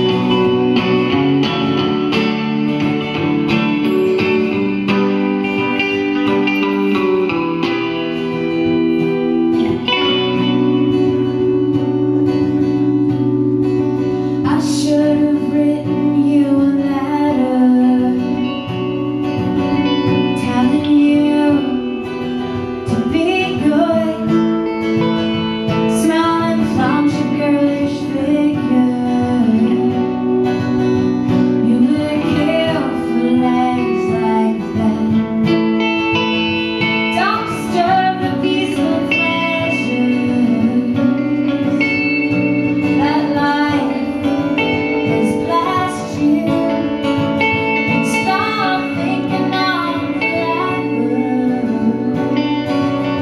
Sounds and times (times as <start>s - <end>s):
Music: 0.0s - 53.2s.